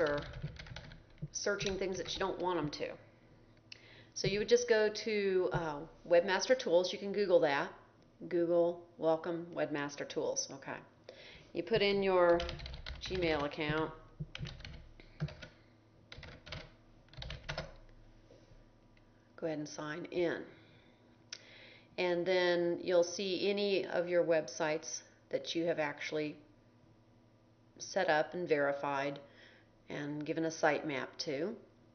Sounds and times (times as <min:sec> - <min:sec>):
Speech: 0:00.0 - 0:00.3, 0:01.4 - 0:03.0, 0:04.2 - 0:10.9, 0:11.6 - 0:14.0, 0:19.4 - 0:20.6, 0:22.0 - 0:26.4, 0:27.8 - 0:29.2, 0:29.9 - 0:31.6.